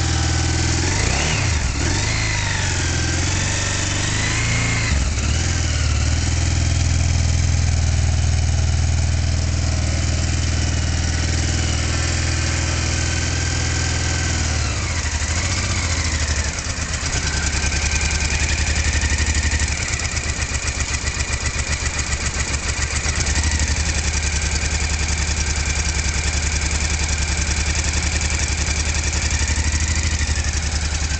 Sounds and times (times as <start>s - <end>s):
Vehicle: 0.0s - 31.2s.